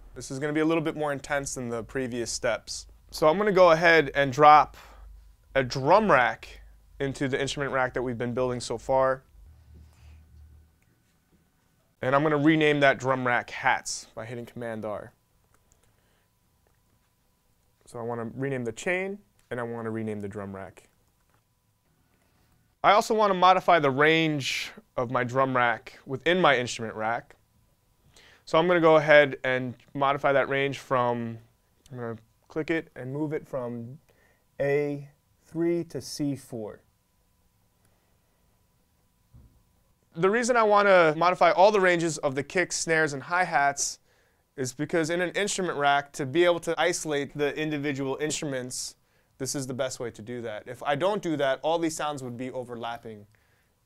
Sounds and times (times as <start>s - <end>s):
Speech: 0.2s - 4.9s, 5.5s - 9.3s, 12.0s - 15.2s, 17.8s - 20.9s, 22.8s - 27.4s, 28.5s - 34.0s, 34.6s - 36.9s, 40.2s - 44.0s, 44.6s - 53.3s.